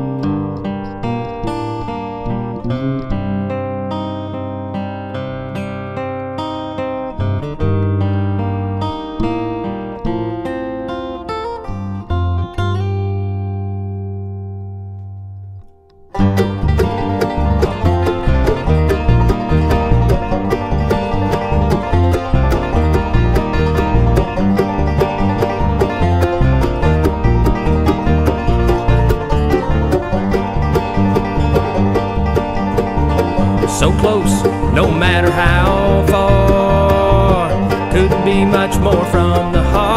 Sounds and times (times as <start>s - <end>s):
Banjo: 0.0s - 12.9s, 16.0s - 39.9s.